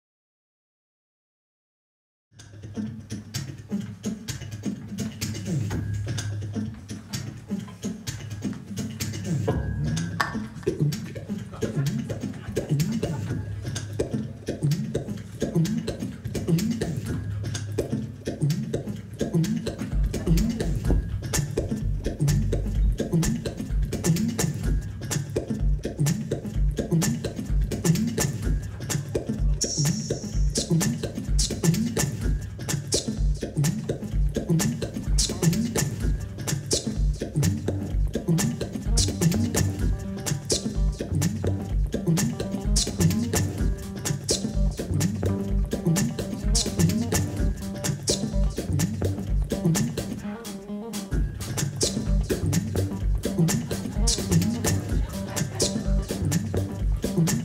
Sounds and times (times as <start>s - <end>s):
Music: 2.4s - 57.4s.